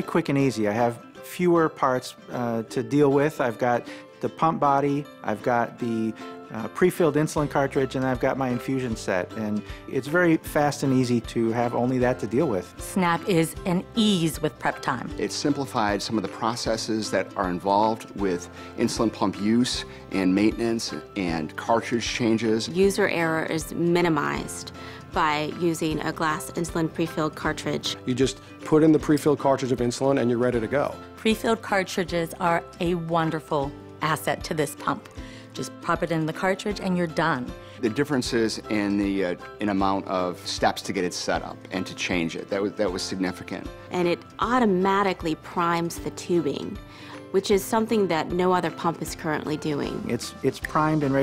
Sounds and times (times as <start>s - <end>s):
Music: 0.0s - 51.2s.